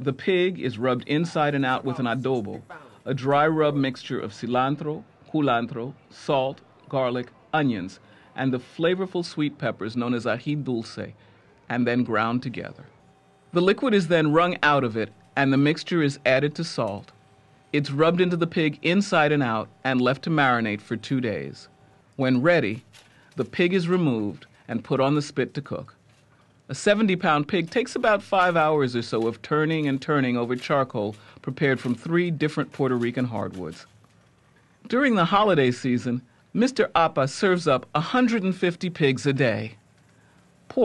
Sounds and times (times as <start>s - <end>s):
Speech: 0.0s - 17.1s, 17.7s - 26.0s, 26.7s - 34.0s, 34.9s - 39.8s.